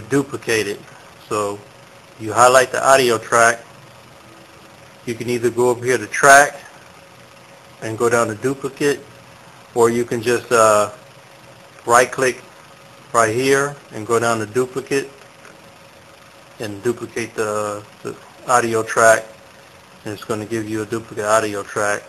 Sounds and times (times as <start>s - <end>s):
Speech: 0.0s - 3.7s, 5.1s - 6.7s, 7.8s - 9.1s, 9.8s - 11.0s, 11.8s - 12.5s, 13.1s - 15.2s, 16.6s - 19.4s, 20.0s - 22.0s.